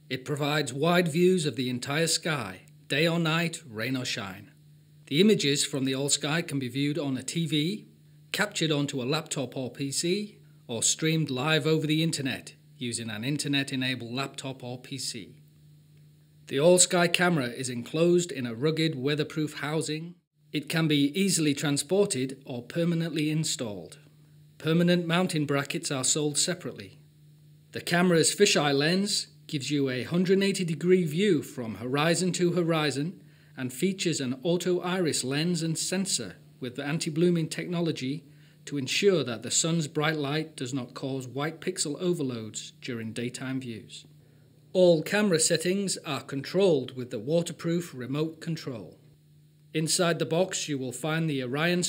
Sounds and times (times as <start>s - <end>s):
Speech: 0.1s - 15.4s, 16.5s - 27.0s, 27.8s - 44.1s, 44.8s - 49.0s, 49.7s - 51.8s.